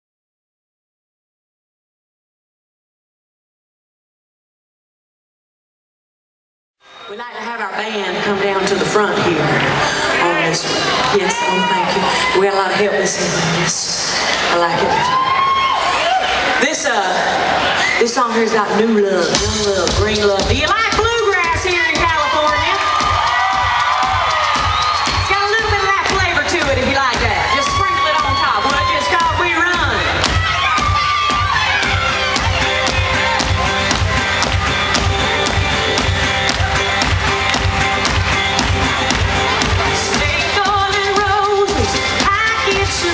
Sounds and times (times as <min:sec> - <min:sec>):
Speech: 0:07.1 - 0:15.1, 0:16.6 - 0:22.9, 0:25.3 - 0:30.1
Music: 0:18.5 - 0:43.1.